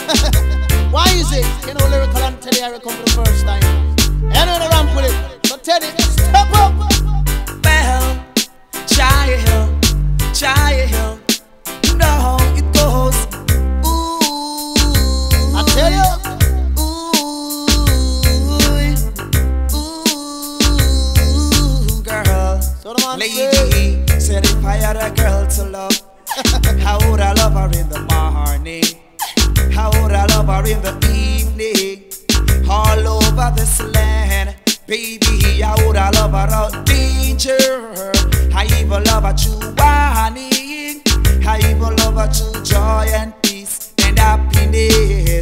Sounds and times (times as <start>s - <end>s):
Music: 0.0s - 45.4s.